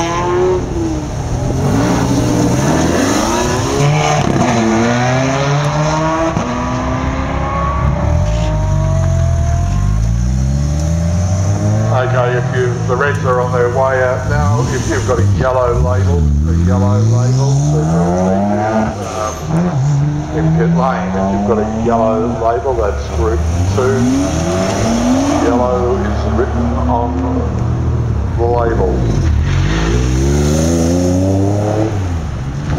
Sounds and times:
Accelerating, revving, vroom: 0.0s - 12.6s, 16.2s - 22.6s, 23.2s - 27.2s, 29.0s - 32.7s
Car: 0.0s - 32.7s
Speech: 11.9s - 19.4s, 20.4s - 24.2s, 25.3s - 27.6s, 28.4s - 29.2s.

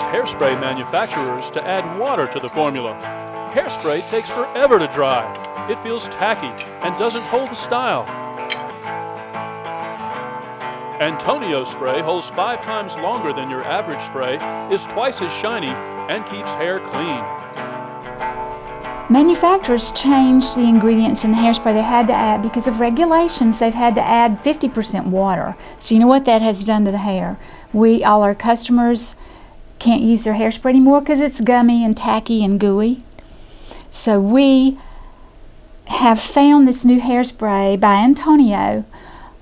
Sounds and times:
Speech: 0.0s - 3.0s, 3.6s - 8.1s, 11.0s - 17.2s, 19.1s - 29.1s, 29.8s - 33.0s, 34.0s - 34.8s, 35.9s - 38.8s
Music: 0.0s - 39.4s.

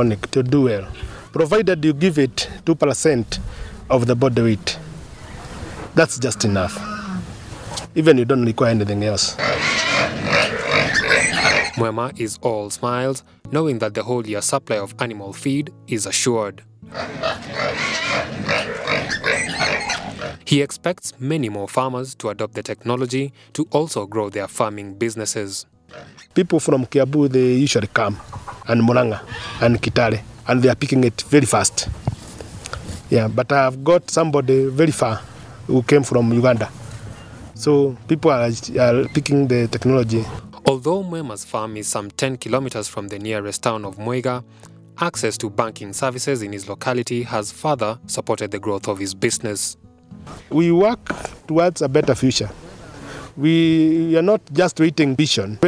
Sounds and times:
Speech: 0.0s - 4.8s, 6.0s - 6.8s, 8.0s - 9.4s, 11.8s - 16.6s, 20.5s - 25.6s, 26.4s - 31.9s, 33.1s - 36.7s, 37.6s - 44.4s, 45.0s - 49.8s, 50.5s - 52.6s, 53.4s - 55.6s
Outside, rural or natural: 0.0s - 12.1s, 25.3s - 45.0s, 49.8s - 55.6s
Animal: 6.2s - 7.3s, 9.4s - 11.8s, 16.9s - 20.4s, 25.9s - 26.4s, 28.0s - 29.8s.

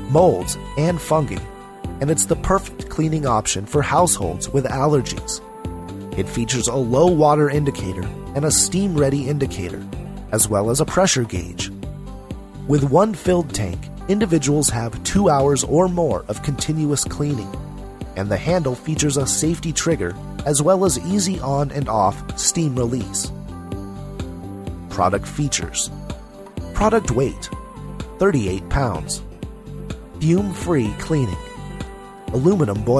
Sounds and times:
Music: 0.0s - 32.9s
Speech: 0.1s - 5.4s, 6.2s - 11.7s, 12.7s - 17.6s, 18.2s - 23.4s, 24.9s - 26.0s, 26.7s - 27.6s, 28.2s - 29.2s, 30.2s - 31.5s, 32.3s - 32.9s.

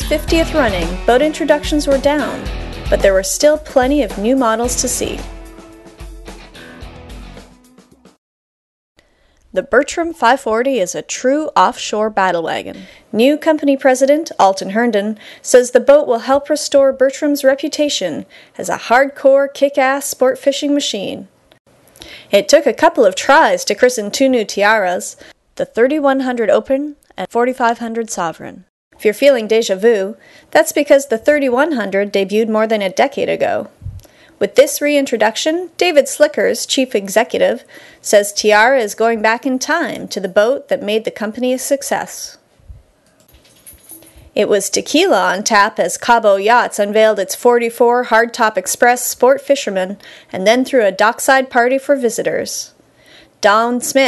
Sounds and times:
Speech: 0.0s - 5.3s, 9.6s - 21.3s, 22.3s - 33.7s, 34.4s - 42.4s, 44.4s - 52.8s, 53.4s - 54.0s.

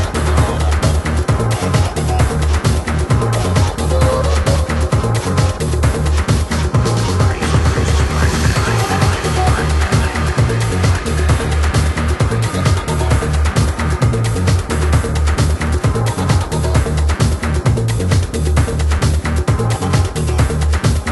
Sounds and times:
Trance music: 0.0s - 21.1s.

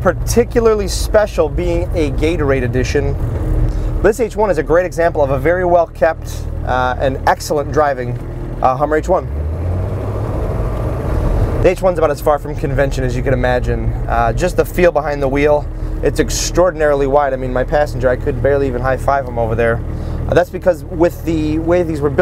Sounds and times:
Speech: 0.0s - 3.2s, 4.0s - 9.3s, 11.6s - 22.2s
Vehicle: 0.0s - 22.2s.

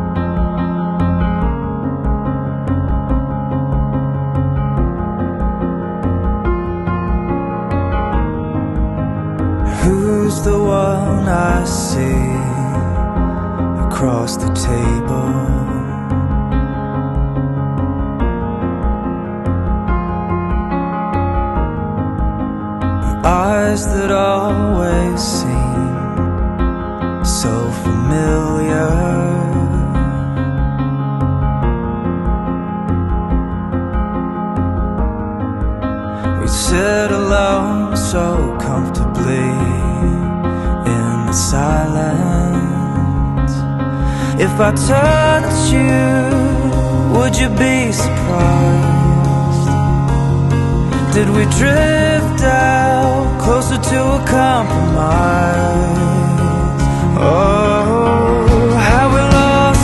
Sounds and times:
Music: 0.0s - 59.8s.

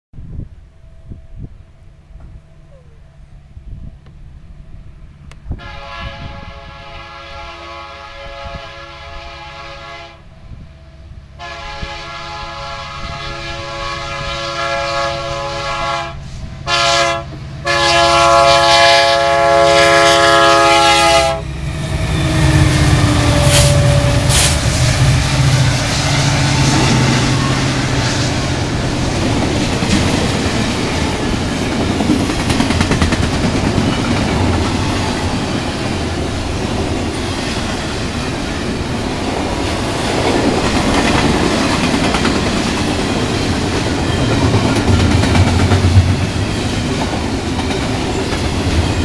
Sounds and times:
Railroad car, train wagon: 0.2s - 49.0s
Train: 0.2s - 49.0s.

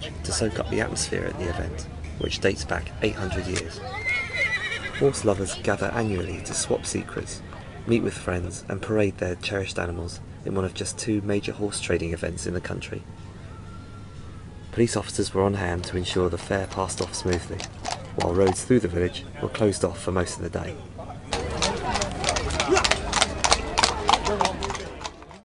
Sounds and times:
Speech: 14.7s - 22.9s.

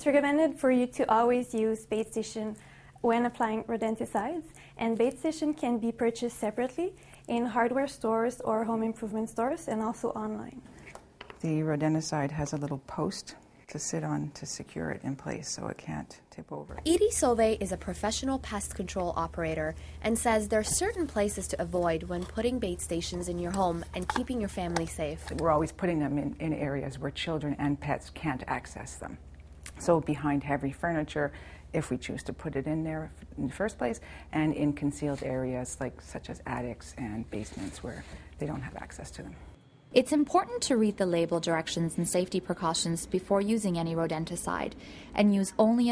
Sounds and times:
Speech: 0.0s - 10.6s, 11.4s - 39.4s, 40.0s - 45.9s.

